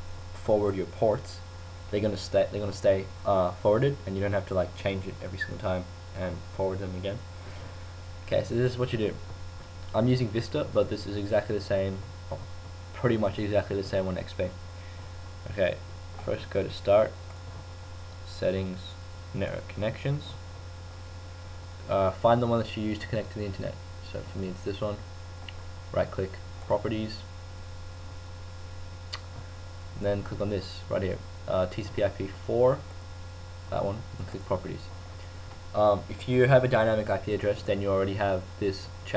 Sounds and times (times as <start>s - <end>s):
Speech: 0.4s - 7.3s, 8.3s - 9.3s, 9.9s - 12.4s, 13.0s - 14.6s, 15.5s - 17.2s, 18.2s - 20.4s, 21.9s - 25.0s, 25.9s - 27.3s, 30.0s - 32.9s, 33.7s - 35.0s, 35.8s - 39.1s.